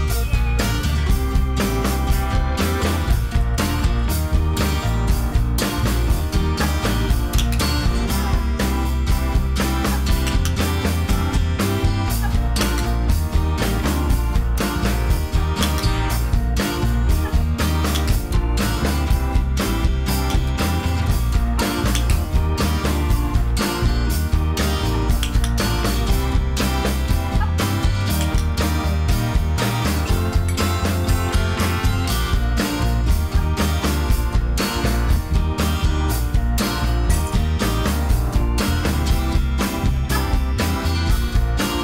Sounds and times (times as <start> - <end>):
Music: 0.0 - 41.8.